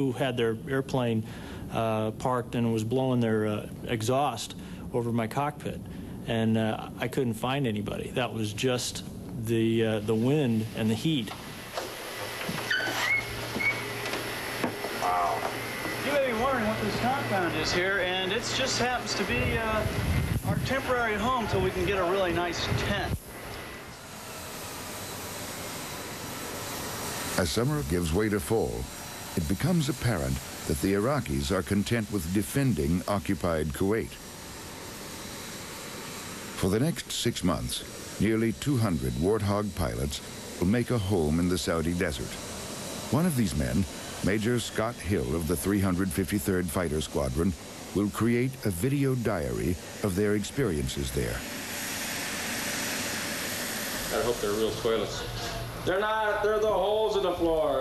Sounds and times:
Speech: 0:00.0 - 0:11.4, 0:16.0 - 0:23.2, 0:27.4 - 0:34.2, 0:36.6 - 0:42.4, 0:43.1 - 0:51.4, 0:54.1 - 0:57.8.

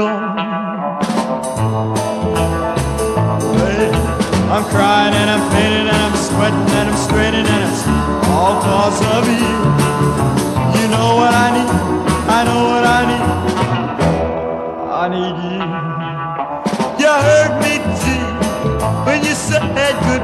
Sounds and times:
Music: 0:00.0 - 0:20.2.

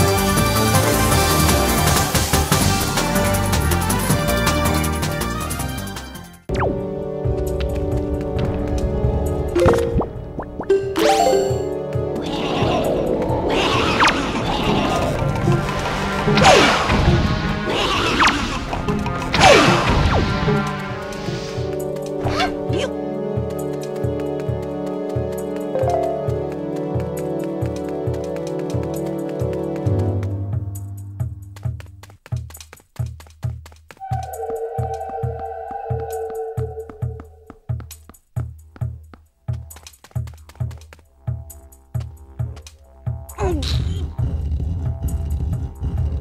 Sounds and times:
Music: 0:00.0 - 0:46.2.

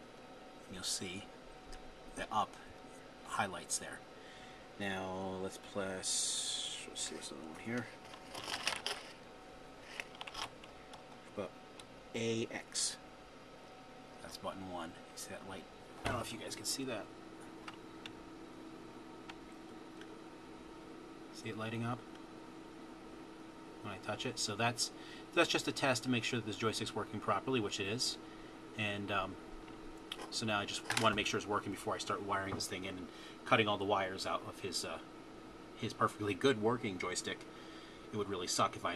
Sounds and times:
Speech: 0:00.7 - 0:01.3, 0:02.2 - 0:04.0, 0:04.8 - 0:08.0, 0:11.3 - 0:11.5, 0:12.2 - 0:13.0, 0:14.2 - 0:17.1, 0:21.3 - 0:22.1, 0:23.8 - 0:28.2, 0:28.8 - 0:29.4, 0:30.2 - 0:35.1, 0:35.8 - 0:37.4, 0:38.1 - 0:38.9.

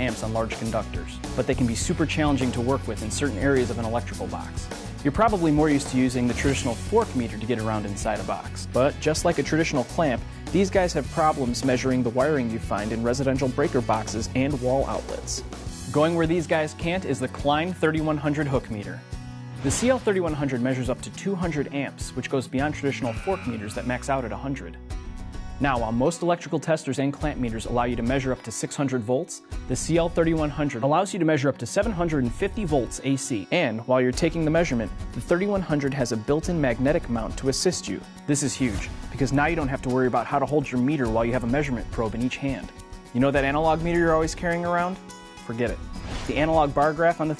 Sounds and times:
Speech: 0:00.0 - 0:19.0, 0:19.6 - 0:24.8, 0:25.6 - 0:47.3
Music: 0:00.0 - 0:47.3.

